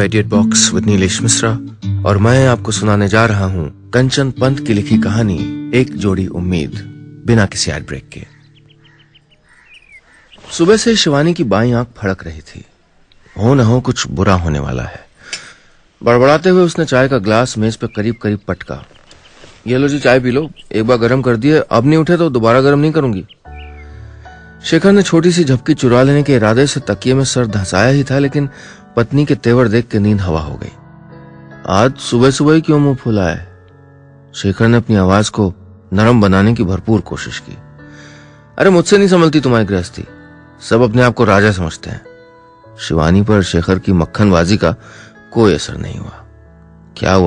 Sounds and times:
Music: 0:00.0 - 0:09.3, 0:16.0 - 0:18.8, 0:19.7 - 0:47.2
Speech: 0:10.5 - 0:12.7, 0:13.4 - 0:15.1, 0:16.0 - 0:18.9, 0:19.6 - 0:23.3, 0:24.6 - 0:30.8, 0:31.6 - 0:33.5, 0:34.3 - 0:37.6, 0:38.6 - 0:42.0, 0:42.8 - 0:46.2, 0:47.0 - 0:47.2.

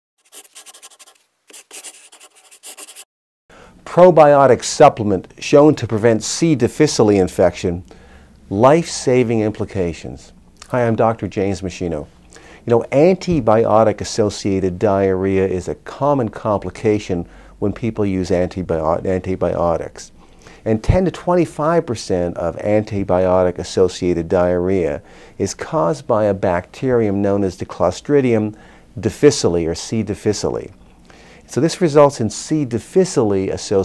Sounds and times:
Speech: 0:03.8 - 0:07.9, 0:08.5 - 0:30.8, 0:31.5 - 0:33.8.

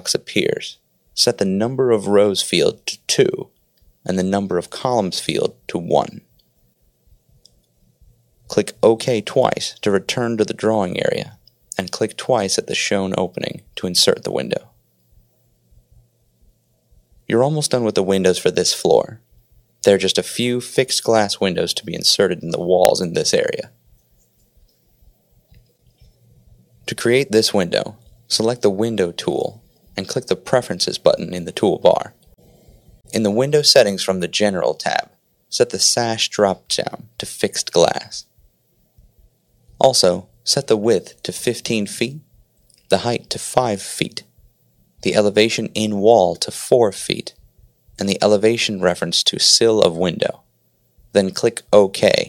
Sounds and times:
Speech: 0:00.0 - 0:06.3, 0:08.5 - 0:14.8, 0:17.3 - 0:23.8, 0:26.9 - 0:32.2, 0:33.1 - 0:38.3, 0:39.8 - 0:44.4, 0:45.0 - 0:47.4, 0:48.0 - 0:50.5, 0:51.1 - 0:52.2.

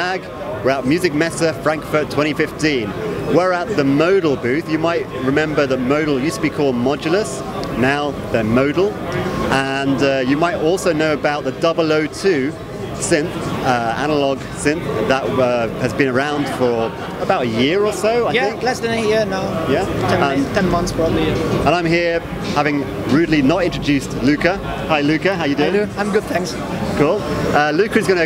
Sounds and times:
Speech: 0:00.0 - 0:28.2.

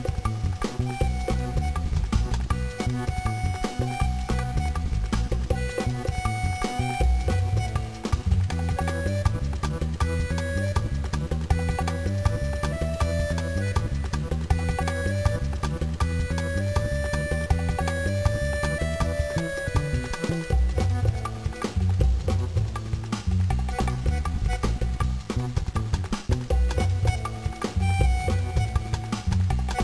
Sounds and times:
Funny music: 0:00.0 - 0:29.8.

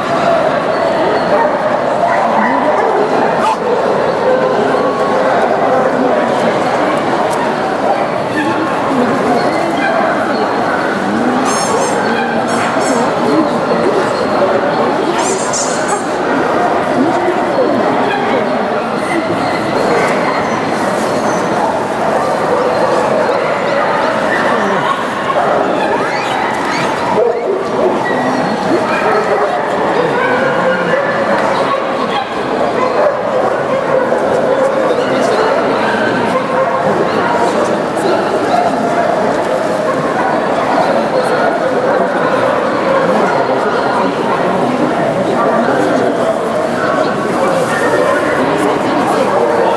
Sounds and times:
Bow-wow: 0:01.2 - 0:05.8, 0:19.4 - 0:37.6.

